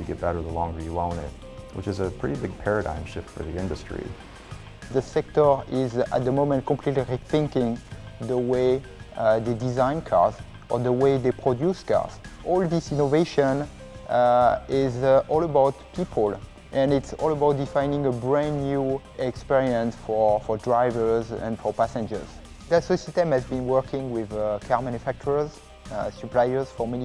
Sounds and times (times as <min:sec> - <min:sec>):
Speech: 0:00.0 - 0:04.2, 0:04.9 - 0:27.0
Music: 0:00.0 - 0:27.0.